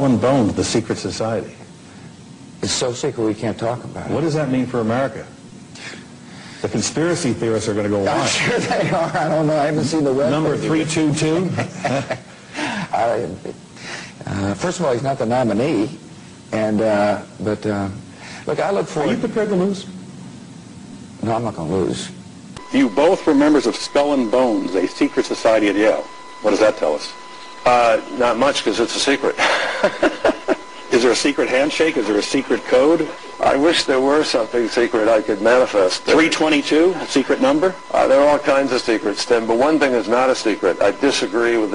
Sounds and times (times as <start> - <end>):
Speech: 14.2 - 19.9, 21.2 - 29.4, 30.9 - 41.7.